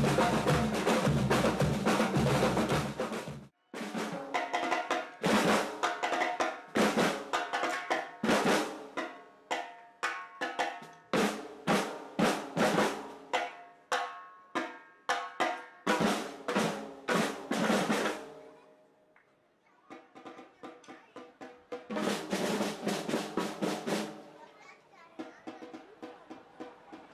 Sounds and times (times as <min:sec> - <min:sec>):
Drum roll: 0:00.0 - 0:09.6, 0:10.4 - 0:13.5, 0:15.3 - 0:18.4, 0:19.9 - 0:24.4, 0:25.2 - 0:27.1.